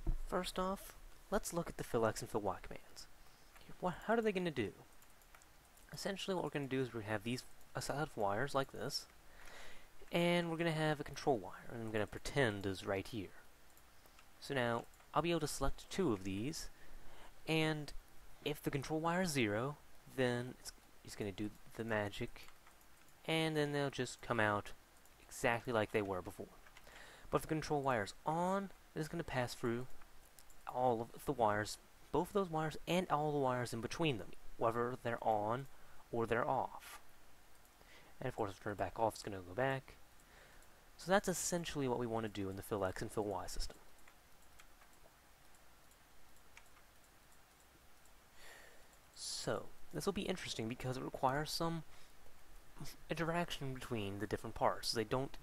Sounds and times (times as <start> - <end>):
Speech: 0.3 - 3.1, 3.7 - 4.9, 5.9 - 9.1, 10.0 - 13.4, 14.4 - 16.7, 17.4 - 22.5, 23.2 - 26.6, 27.3 - 30.0, 30.6 - 37.0, 38.2 - 40.0, 41.0 - 43.8, 49.2 - 51.9, 52.8 - 55.4.